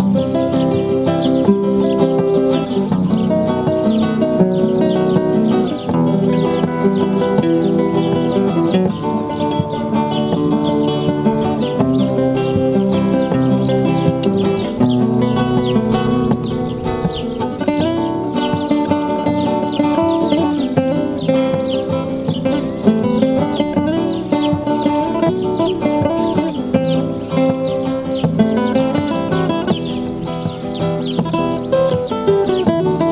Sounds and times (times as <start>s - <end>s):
Acoustic guitar: 0.0s - 33.1s
Strum: 0.0s - 33.1s.